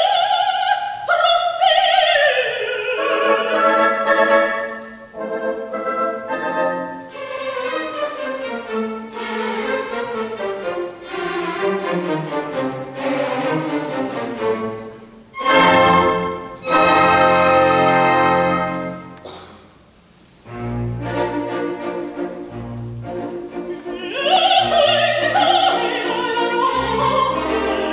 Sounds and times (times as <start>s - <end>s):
Classical music: 1.6s - 27.9s.